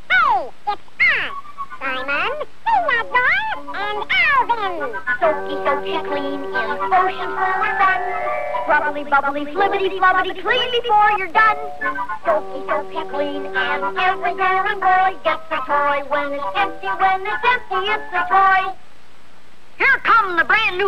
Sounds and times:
Music: 3.0 - 18.7.

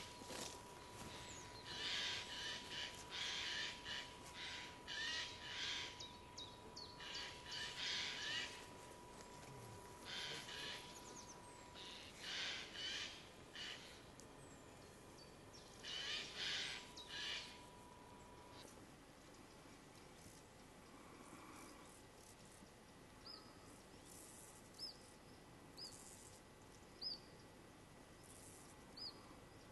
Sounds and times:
Owl: 0.0 - 6.2, 6.8 - 8.7, 10.0 - 14.1, 15.8 - 17.7.

